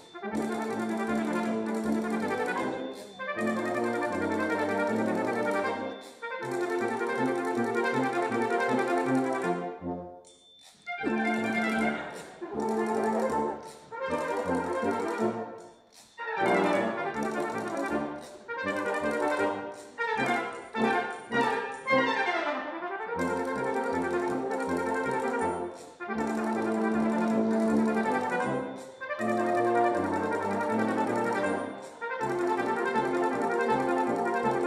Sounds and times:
French horn: 0.0s - 10.1s, 10.9s - 34.6s.

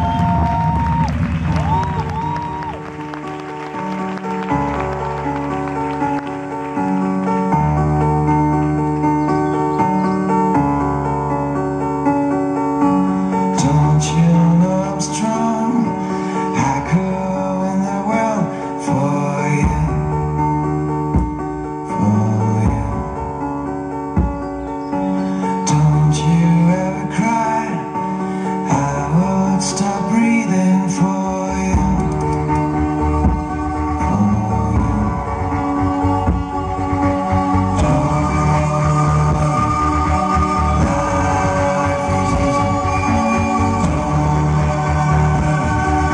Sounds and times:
Inside, large room or hall: 0.0s - 46.1s
Music: 0.0s - 46.1s.

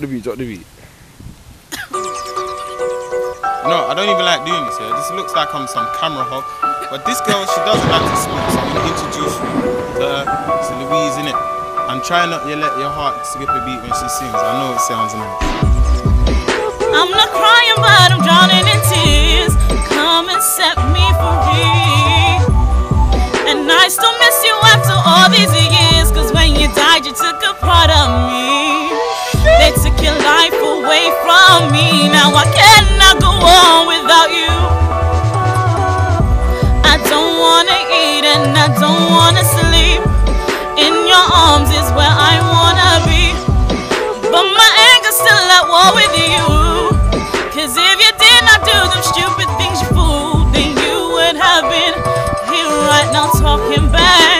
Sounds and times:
Music: 1.8s - 54.3s.

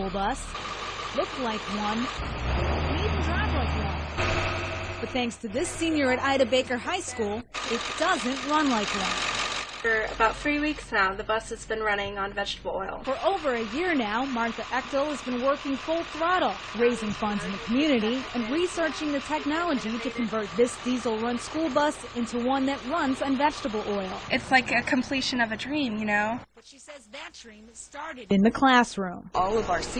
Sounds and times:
Speech: 0.0s - 0.5s, 1.2s - 2.1s, 2.9s - 4.1s, 5.0s - 9.2s, 9.8s - 29.9s
Bus: 0.0s - 12.1s, 13.0s - 26.4s.

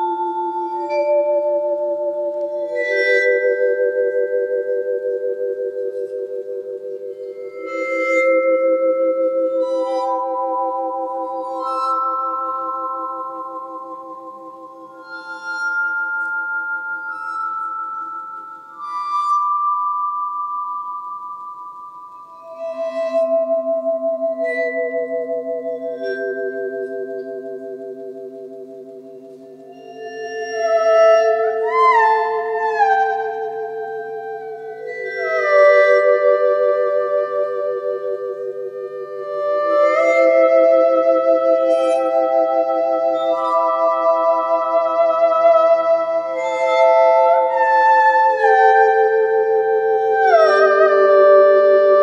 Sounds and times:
Glockenspiel: 0.0s - 52.0s.

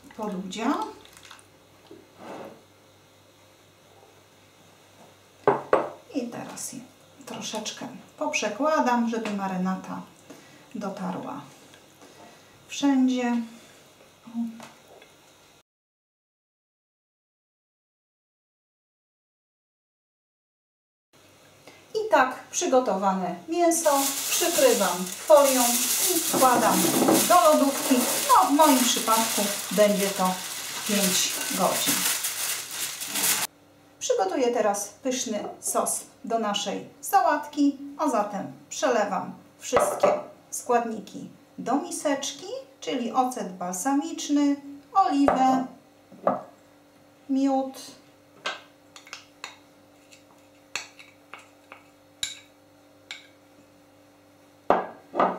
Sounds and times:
Speech: 0.2s - 1.0s, 6.1s - 10.1s, 10.8s - 11.6s, 12.7s - 13.6s, 14.3s - 14.6s, 22.0s - 32.1s, 34.0s - 45.8s, 47.3s - 48.0s.

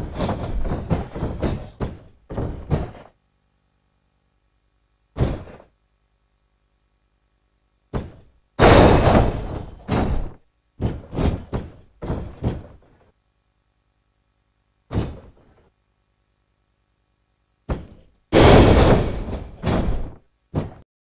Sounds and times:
Slam: 0.0s - 3.1s, 5.2s - 5.7s, 7.9s - 12.8s, 14.9s - 15.5s, 17.7s - 20.8s.

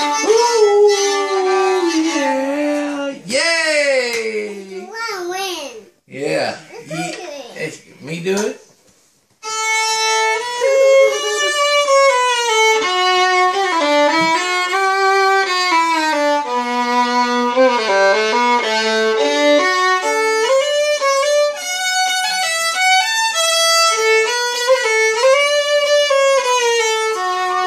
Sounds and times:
Violin, fiddle: 0.0s - 3.2s, 9.4s - 27.6s.

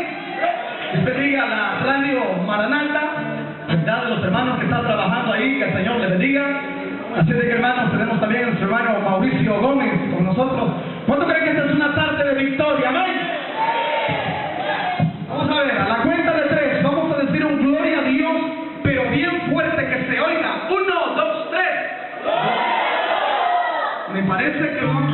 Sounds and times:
Speech: 0.0s - 13.4s, 15.3s - 22.0s, 24.1s - 25.1s
Music: 1.0s - 8.0s, 24.5s - 25.1s.

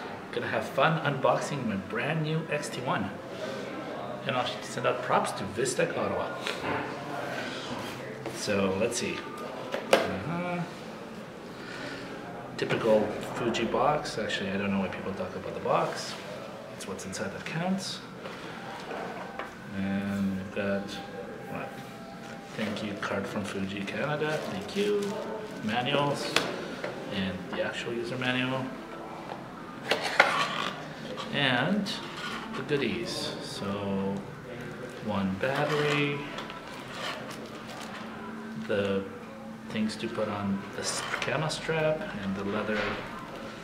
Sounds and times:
Speech: 0.3s - 3.2s, 4.1s - 6.5s, 12.6s - 16.2s, 16.8s - 18.1s, 22.5s - 26.5s, 31.2s - 36.4s, 38.6s - 43.1s.

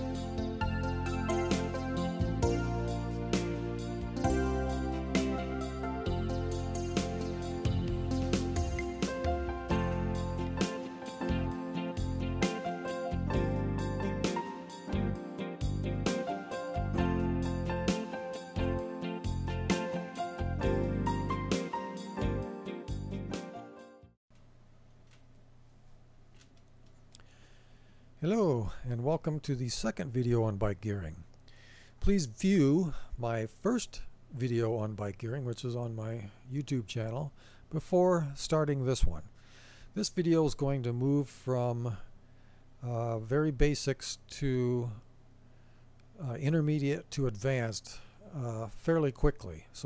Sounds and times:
Music: 0.0s - 24.2s
Speech: 28.2s - 31.3s, 32.0s - 39.3s, 40.0s - 42.1s, 42.8s - 45.0s, 46.2s - 49.8s.

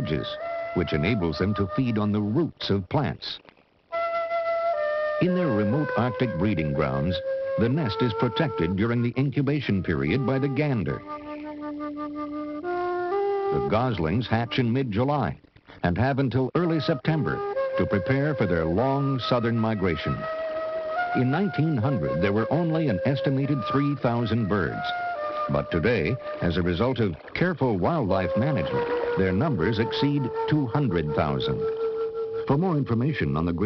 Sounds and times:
Music: 0.0s - 2.8s, 3.8s - 33.6s
Speech: 0.0s - 3.4s, 5.2s - 11.0s, 13.5s - 20.2s, 21.2s - 31.7s, 32.5s - 33.6s.

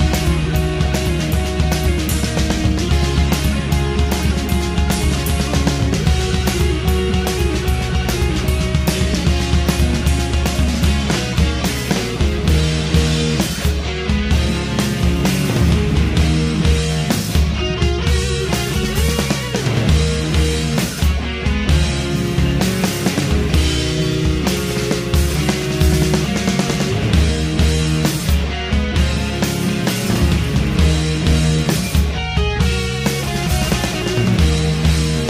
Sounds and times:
Heavy metal: 0.0s - 35.2s
Progressive rock: 0.0s - 35.2s.

